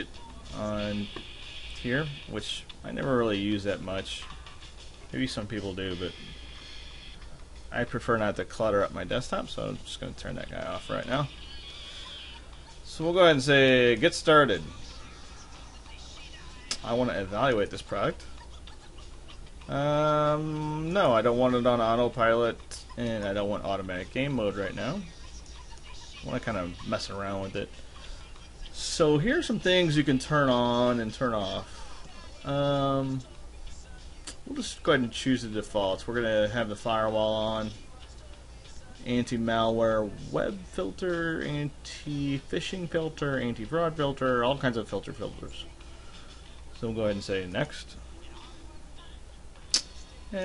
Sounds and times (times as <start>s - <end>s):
Inside, small room: 0.0s - 50.4s
Music: 0.0s - 50.4s.